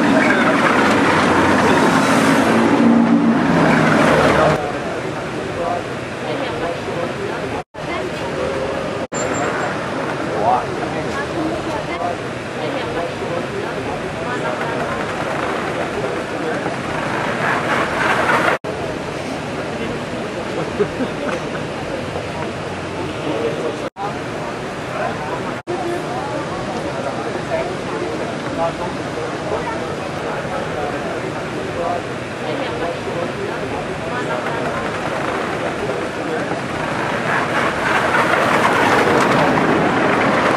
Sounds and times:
Speech: 4.0s - 16.8s, 18.7s - 37.6s.

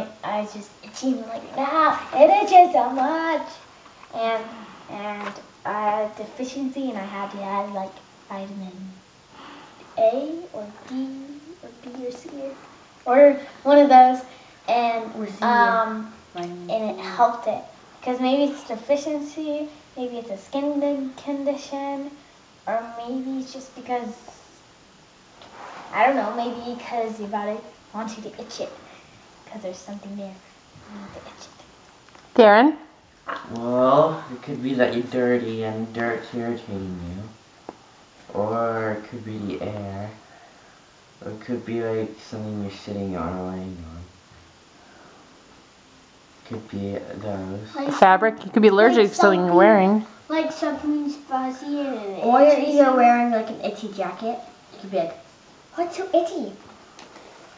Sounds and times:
Child speech, kid speaking: 0.0s - 9.0s, 9.9s - 24.6s, 25.9s - 31.7s, 47.6s - 56.7s
Inside, small room: 0.0s - 57.5s.

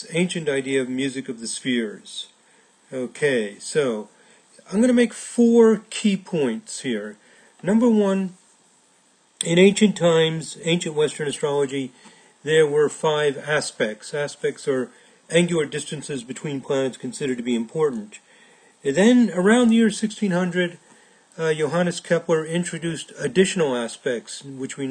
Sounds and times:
Speech: 0.0s - 8.4s, 9.4s - 20.8s, 21.4s - 24.9s.

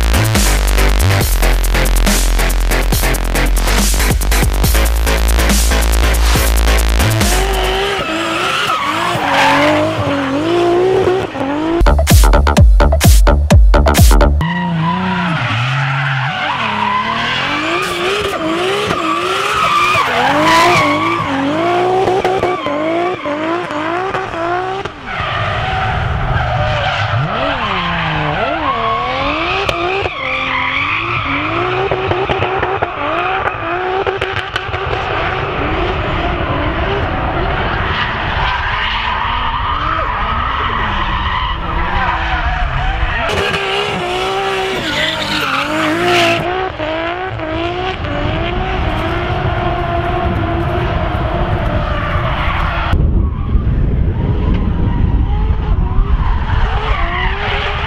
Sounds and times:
Race car, auto racing: 0.0s - 11.9s, 14.4s - 57.8s
Skidding: 0.0s - 57.8s.

